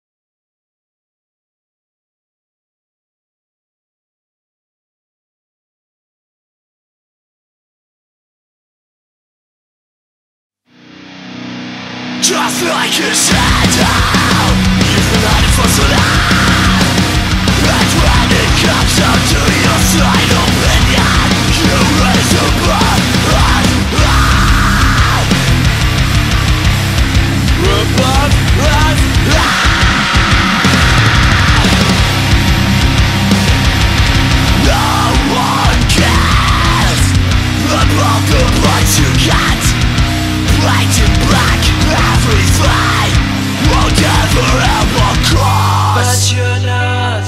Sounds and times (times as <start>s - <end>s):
Music: 10.7s - 47.2s.